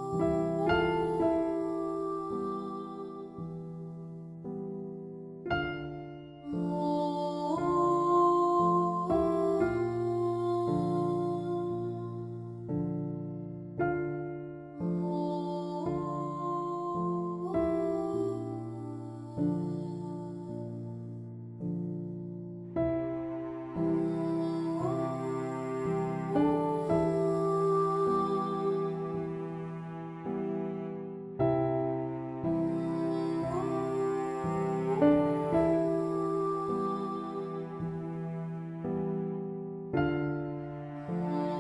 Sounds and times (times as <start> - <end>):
Music: 0.0 - 41.6.